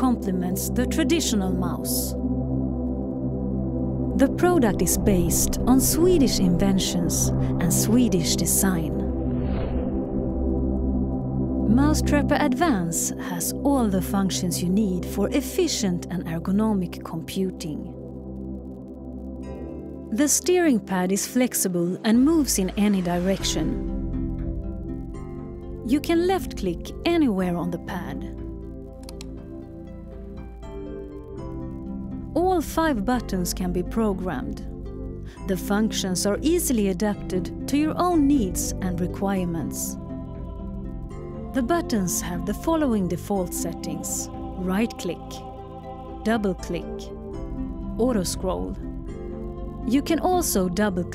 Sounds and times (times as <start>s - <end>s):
Speech: 0.0s - 2.2s, 4.2s - 9.1s, 11.7s - 17.9s, 20.2s - 23.8s, 25.9s - 28.3s, 32.4s - 34.6s, 35.5s - 40.0s, 41.6s - 45.4s, 46.3s - 47.1s, 48.0s - 48.8s, 49.9s - 51.1s
Music: 0.0s - 51.1s.